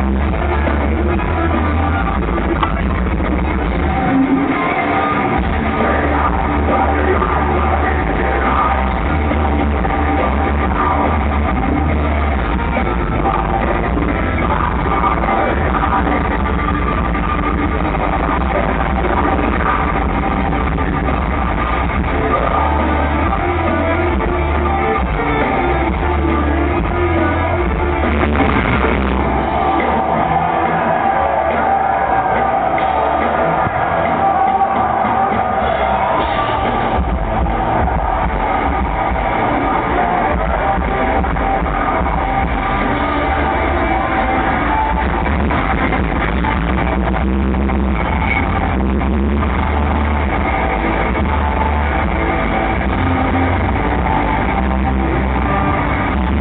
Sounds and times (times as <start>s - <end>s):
Music: 0.0s - 56.4s.